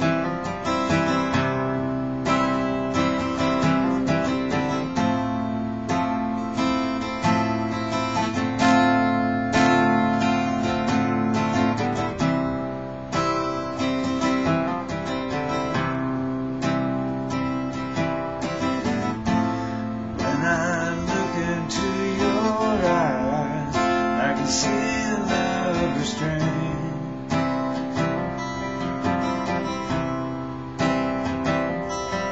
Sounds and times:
Music: 0:00.0 - 0:32.3.

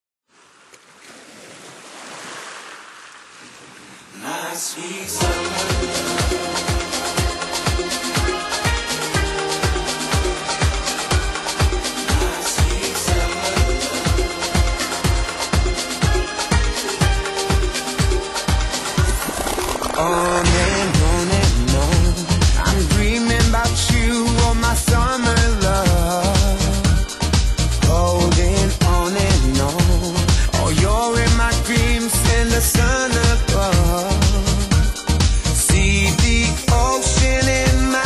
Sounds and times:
Music: 0:04.8 - 0:38.0.

